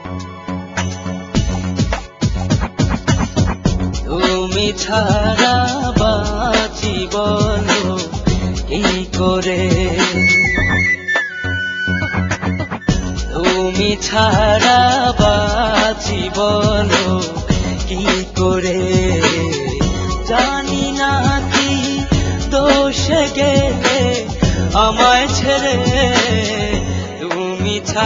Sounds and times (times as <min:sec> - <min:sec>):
Sad music: 0:00.0 - 0:28.0.